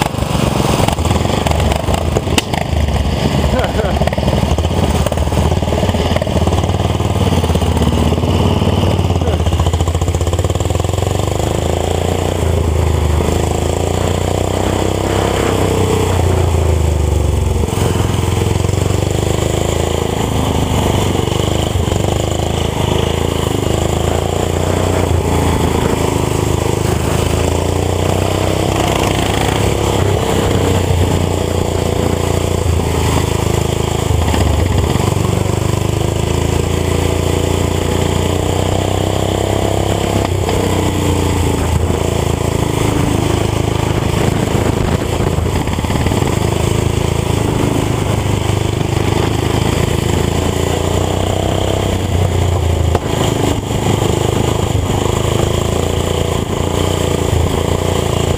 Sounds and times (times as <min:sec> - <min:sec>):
Motorcycle: 0:00.0 - 0:58.3.